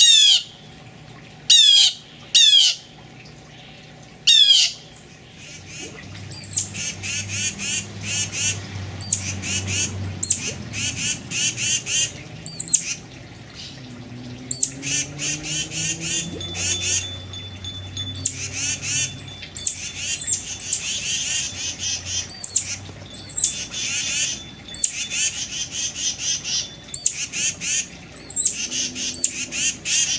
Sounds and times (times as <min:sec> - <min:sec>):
Water: 0:00.0 - 0:30.1.